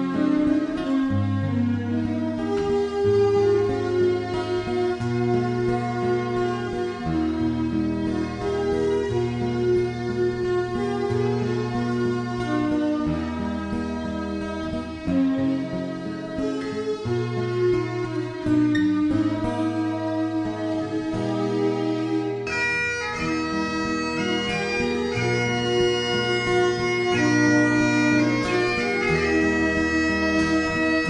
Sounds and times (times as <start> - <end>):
Bagpipes: 0.0 - 31.0
Wind instrument, woodwind instrument: 0.0 - 31.0.